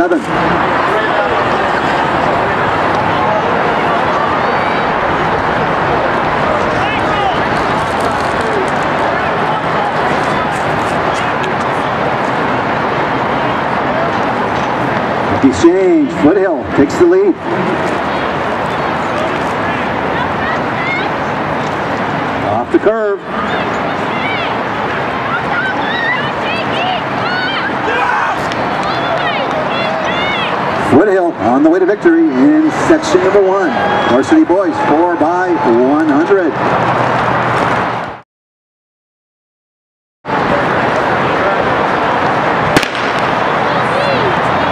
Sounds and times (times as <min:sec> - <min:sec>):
Outside, urban or manmade: 0:00.0 - 0:38.2, 0:40.2 - 0:44.7.